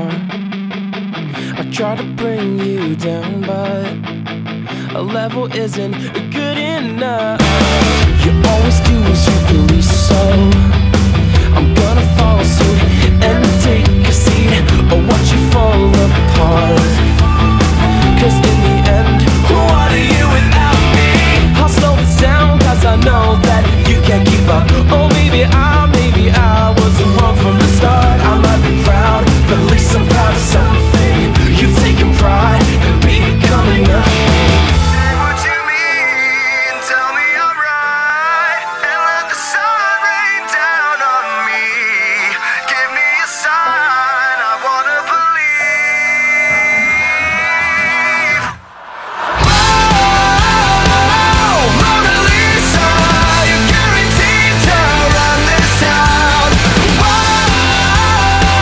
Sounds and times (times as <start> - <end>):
Music: 0.0 - 58.6.